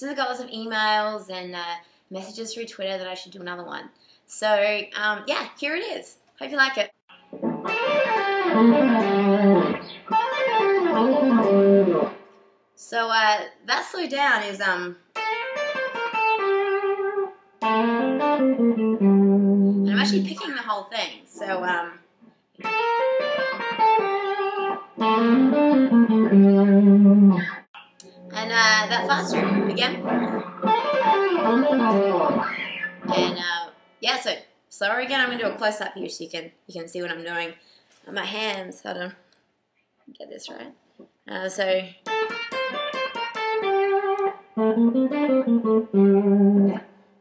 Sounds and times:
Speech: 0:00.0 - 0:07.0, 0:12.8 - 0:15.0, 0:19.9 - 0:22.0, 0:28.3 - 0:30.4, 0:33.1 - 0:39.2, 0:40.1 - 0:42.0
Guitar: 0:06.5 - 0:36.2, 0:40.5 - 0:47.0.

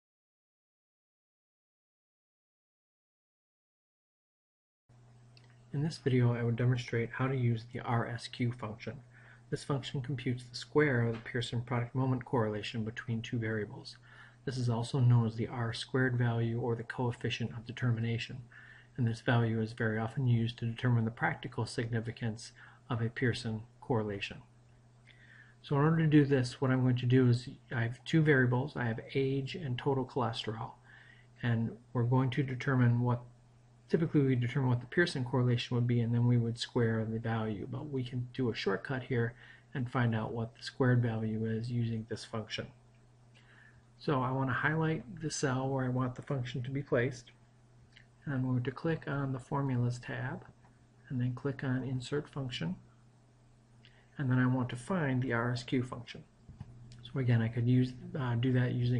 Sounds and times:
Speech: 0:05.7 - 0:24.5, 0:25.6 - 0:30.8, 0:31.4 - 0:33.3, 0:33.9 - 0:42.8, 0:44.0 - 0:47.4, 0:48.2 - 0:52.9, 0:54.2 - 0:56.3, 0:57.0 - 0:58.9.

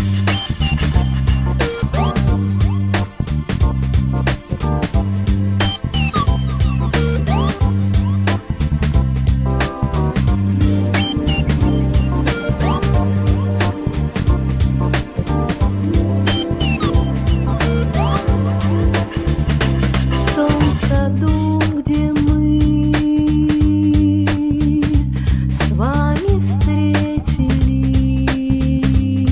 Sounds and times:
Music: 0:00.0 - 0:29.3.

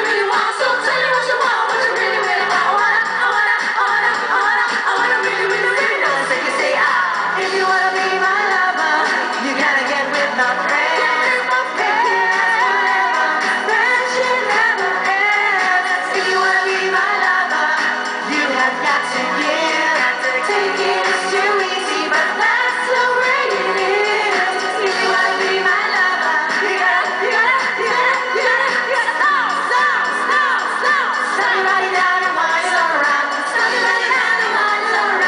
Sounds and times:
Music: 0:00.0 - 0:35.2.

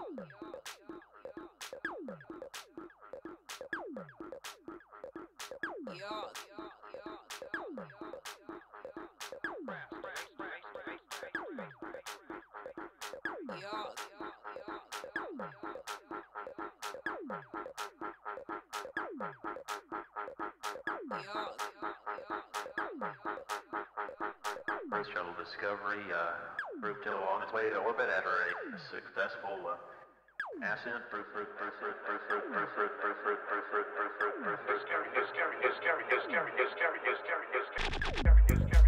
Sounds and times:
Electronic music: 0:00.0 - 0:29.0, 0:37.8 - 0:38.8
Speech: 0:05.9 - 0:07.2, 0:21.1 - 0:21.9, 0:24.9 - 0:30.0, 0:30.6 - 0:32.8.

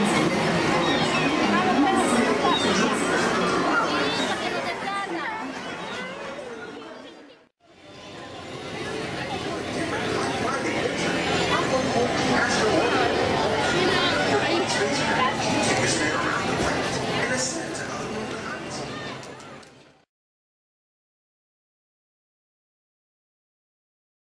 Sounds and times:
Speech: 0:00.0 - 0:20.0.

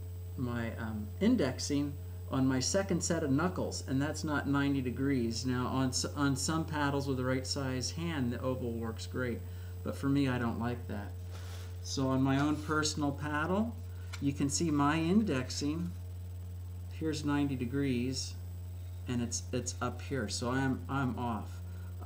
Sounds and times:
Speech: 0:00.4 - 0:11.2, 0:11.8 - 0:16.0, 0:16.9 - 0:18.4, 0:19.1 - 0:22.0.

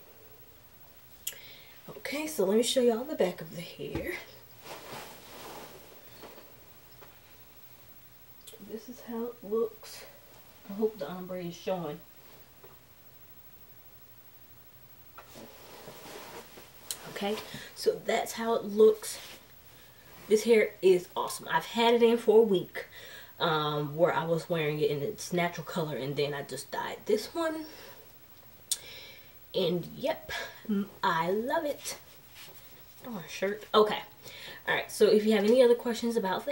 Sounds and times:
Inside, small room: 0:00.0 - 0:36.5
Speech: 0:01.9 - 0:04.3, 0:08.6 - 0:12.1, 0:17.2 - 0:19.4, 0:20.3 - 0:27.8, 0:29.6 - 0:32.0, 0:33.0 - 0:34.1, 0:34.7 - 0:36.5.

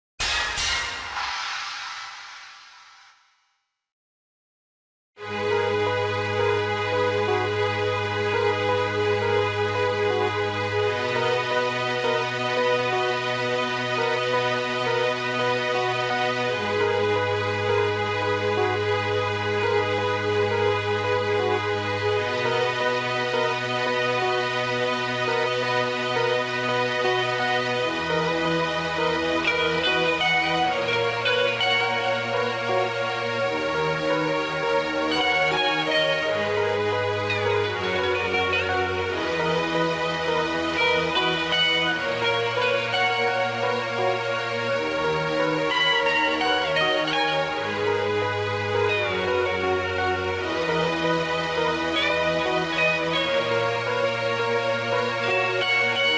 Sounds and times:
Music: 0:00.2 - 0:02.0, 0:05.2 - 0:56.1.

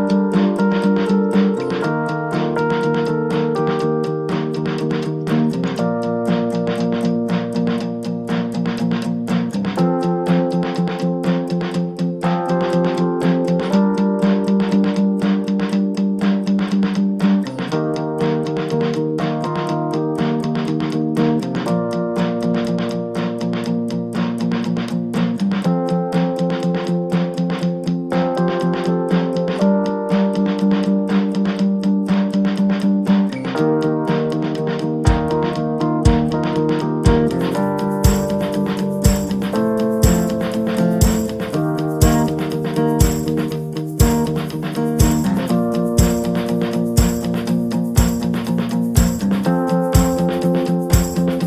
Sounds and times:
Music: 0:00.0 - 0:51.4.

